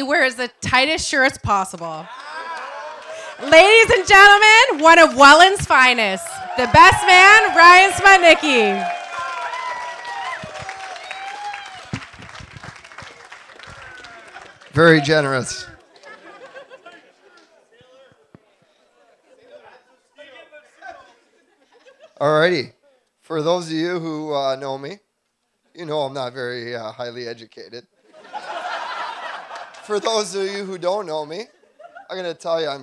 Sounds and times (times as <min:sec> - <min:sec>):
Narration, monologue: 0:00.0 - 0:02.2, 0:03.0 - 0:08.8, 0:22.2 - 0:28.4, 0:29.3 - 0:32.8
Male speech, man speaking: 0:14.8 - 0:15.8, 0:16.8 - 0:18.6, 0:19.3 - 0:21.2, 0:22.2 - 0:25.0, 0:25.8 - 0:27.9, 0:29.8 - 0:32.8.